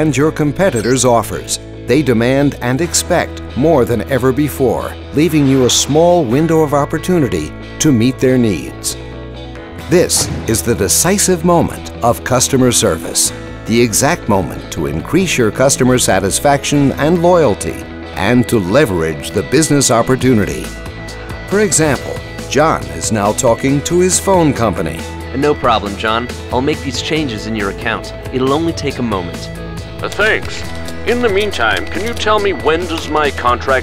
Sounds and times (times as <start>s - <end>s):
Male speech, man speaking: 0.0s - 9.0s, 9.9s - 20.7s, 21.5s - 33.8s
Conversation: 0.0s - 33.8s
Music: 0.0s - 33.8s.